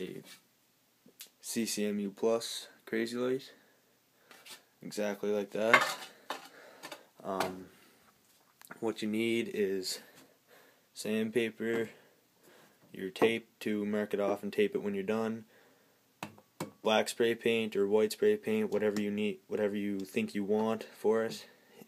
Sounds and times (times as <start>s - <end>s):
Speech: 1.4s - 3.6s, 4.8s - 5.8s, 7.2s - 7.7s, 8.8s - 10.1s, 11.0s - 12.0s, 12.9s - 15.5s, 16.8s - 21.5s.